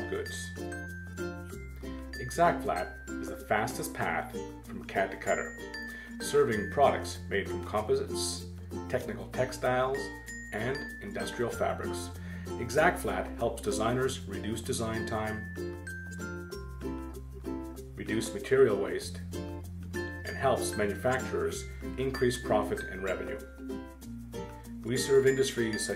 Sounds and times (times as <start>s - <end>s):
Speech: 0.0s - 0.5s, 2.2s - 5.5s, 6.2s - 15.4s, 18.0s - 19.2s, 20.3s - 23.4s, 24.9s - 25.9s.